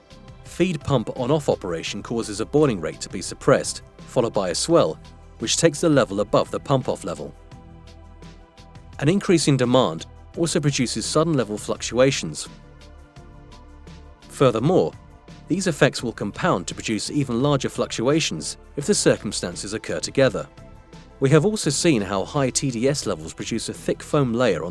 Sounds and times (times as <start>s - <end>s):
Music: 0.0s - 24.7s
Speech: 0.5s - 7.4s, 9.0s - 12.5s, 14.3s - 20.5s, 21.2s - 24.7s.